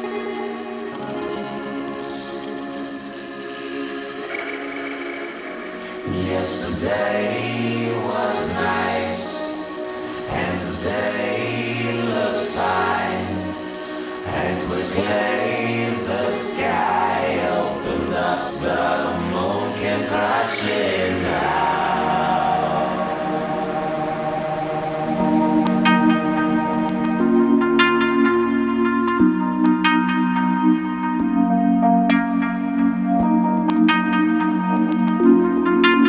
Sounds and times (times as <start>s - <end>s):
Music: 0.0s - 36.0s.